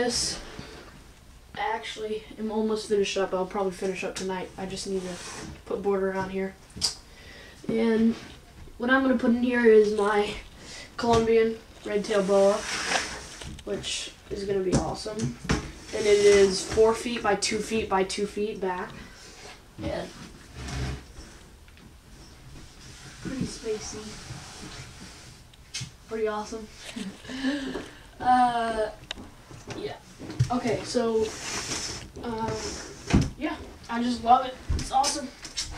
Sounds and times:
Speech: 0:00.0 - 0:00.4, 0:01.6 - 0:06.6, 0:07.7 - 0:08.2, 0:08.8 - 0:10.4, 0:11.0 - 0:12.7, 0:13.6 - 0:19.0, 0:19.8 - 0:20.2, 0:23.2 - 0:24.2, 0:26.1 - 0:26.7, 0:28.2 - 0:29.0, 0:29.7 - 0:31.4, 0:32.2 - 0:32.8, 0:33.4 - 0:35.4
Inside, small room: 0:00.0 - 0:35.7.

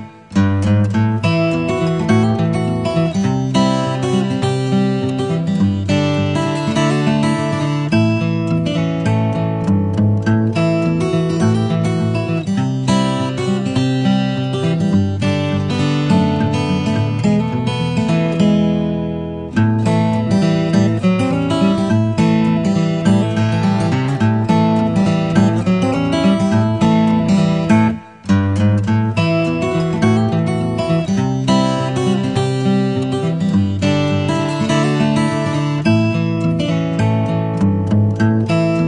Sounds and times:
Music: 0:00.0 - 0:38.8.

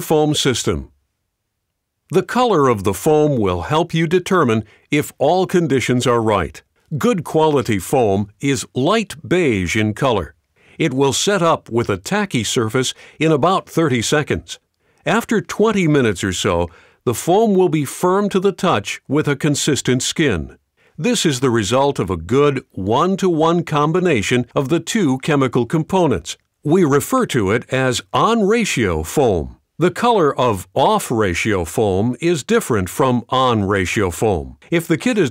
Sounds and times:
Speech: 0:00.0 - 0:01.0, 0:02.1 - 0:35.3.

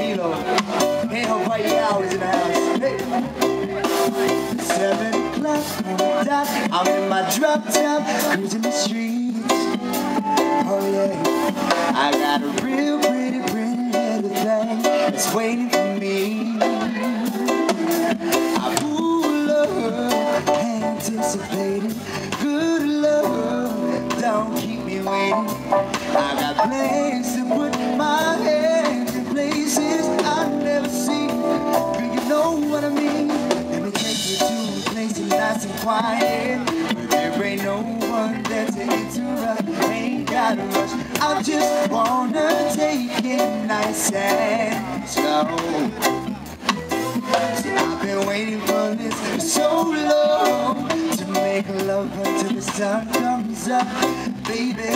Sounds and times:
Music: 0:00.0 - 0:54.9.

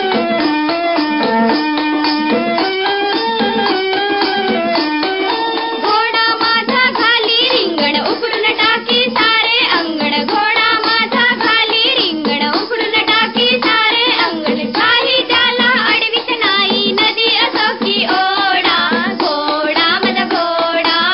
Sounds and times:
Music: 0:00.0 - 0:21.1.

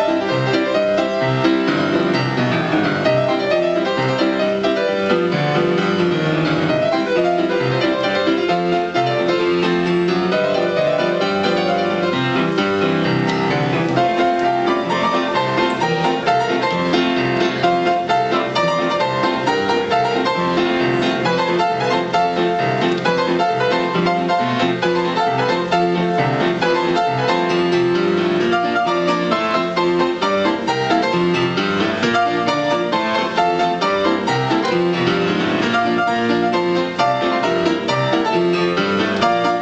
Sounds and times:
Music: 0:00.0 - 0:39.6.

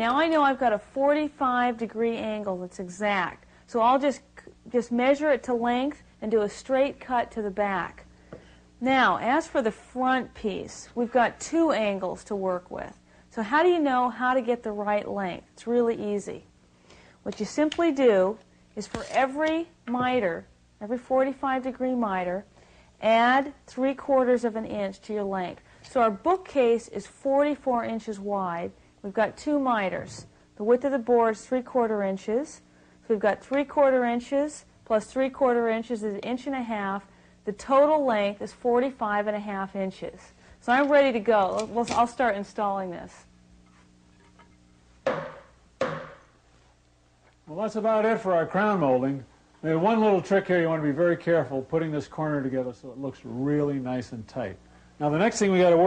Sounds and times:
Speech: 0:08.8 - 0:16.4, 0:17.3 - 0:43.3, 0:47.5 - 0:55.8.

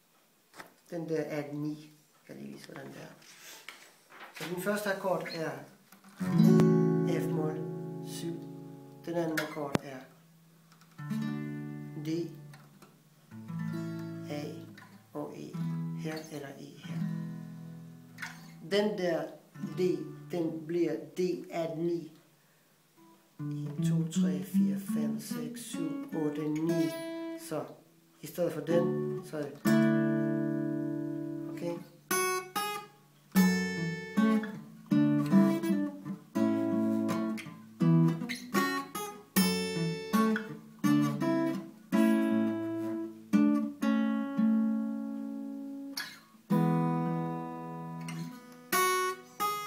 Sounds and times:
Speech: 0:00.9 - 0:03.3, 0:04.4 - 0:05.8, 0:07.0 - 0:10.1, 0:12.0 - 0:12.4, 0:14.2 - 0:17.0, 0:18.6 - 0:22.2, 0:23.4 - 0:29.7, 0:31.5 - 0:31.9.

